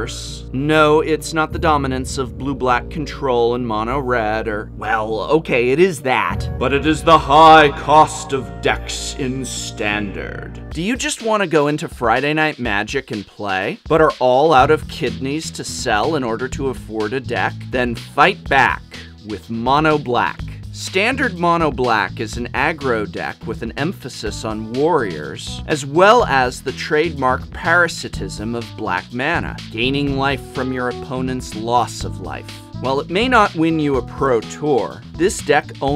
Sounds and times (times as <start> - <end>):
Music: 0.0 - 35.9
Speech: 0.0 - 35.9.